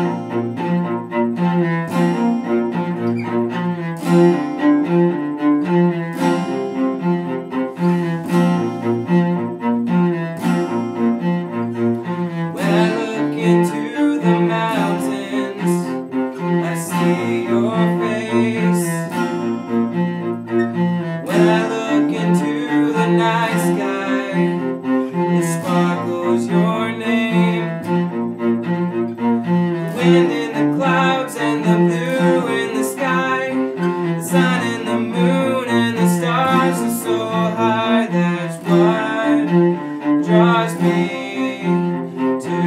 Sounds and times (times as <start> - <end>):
Acoustic guitar: 0.0 - 42.6
Cello: 0.0 - 42.6
Strum: 0.0 - 42.6.